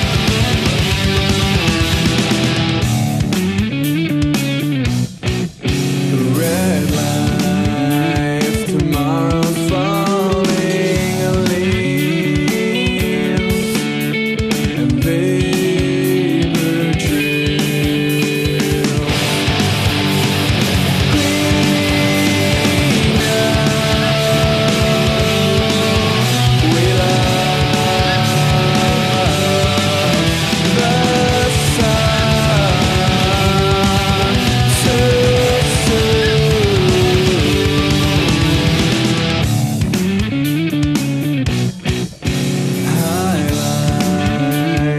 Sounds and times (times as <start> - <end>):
Music: 0.0 - 44.9.